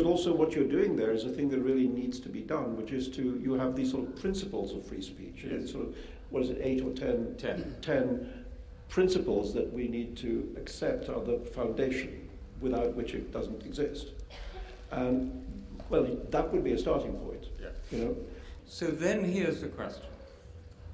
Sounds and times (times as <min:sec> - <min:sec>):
Male speech, man speaking: 0:00.0 - 0:08.2, 0:08.9 - 0:14.2, 0:14.9 - 0:20.2.